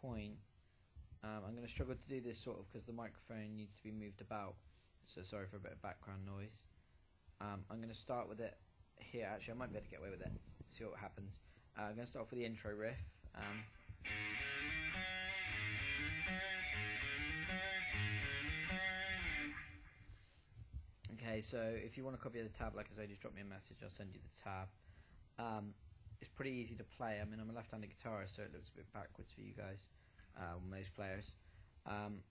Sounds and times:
Speech: 0.0 - 0.4, 1.2 - 6.7, 7.4 - 13.7, 21.0 - 24.8, 25.4 - 32.3.

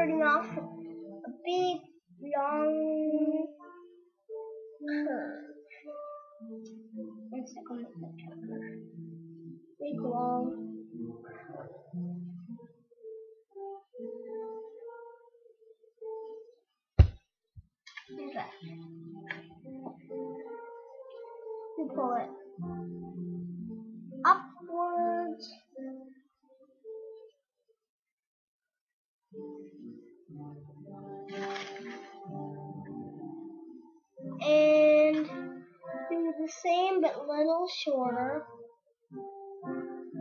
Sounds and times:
Speech: 0.0 - 0.6, 1.2 - 3.6, 4.8 - 5.5, 7.3 - 8.2, 9.8 - 10.6, 18.1 - 18.6, 21.8 - 22.3, 24.3 - 25.6, 34.4 - 35.4, 36.1 - 38.5
Music: 0.0 - 17.2, 17.9 - 27.4, 29.2 - 40.2.

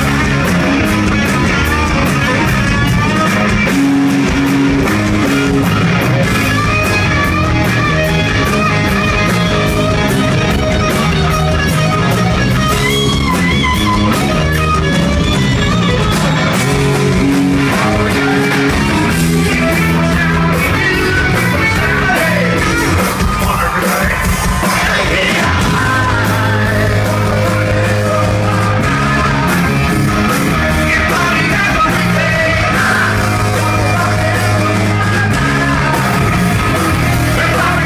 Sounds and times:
Inside, large room or hall: 0.0 - 37.8
Music: 0.0 - 37.8
Singing: 23.4 - 29.9, 30.6 - 37.8.

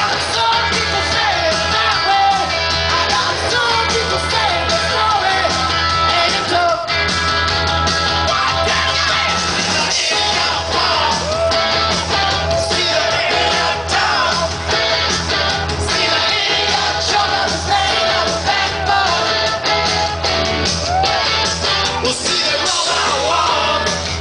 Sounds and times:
Music: 0.0 - 24.2.

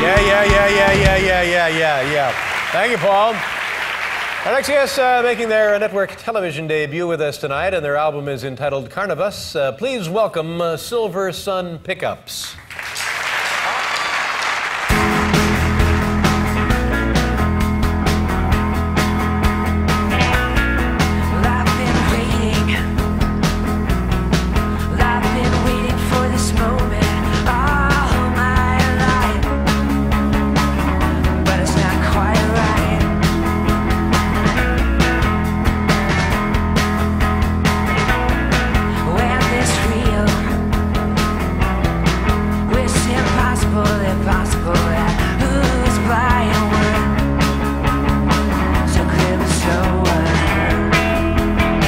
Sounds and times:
Psychedelic rock: 14.9 - 51.8
Singing: 24.9 - 29.5, 39.0 - 40.6, 42.7 - 47.1, 48.8 - 50.7.

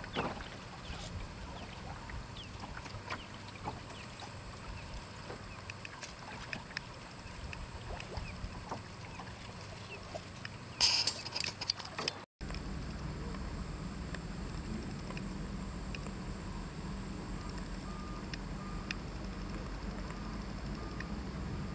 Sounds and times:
Sailboat, sailing ship: 0.0 - 21.7.

